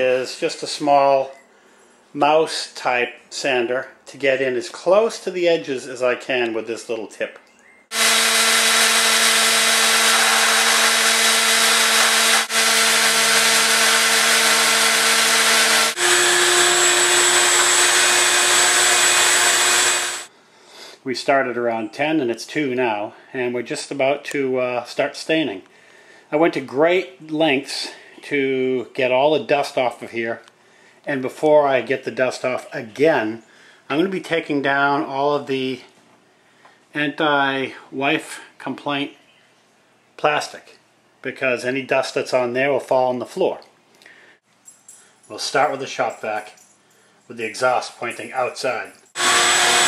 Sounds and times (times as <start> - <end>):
Speech: 0.0 - 1.4, 2.2 - 7.4, 21.0 - 25.7, 26.3 - 30.5, 31.1 - 35.9, 37.0 - 39.2, 40.2 - 43.7, 45.3 - 46.6, 47.3 - 49.0.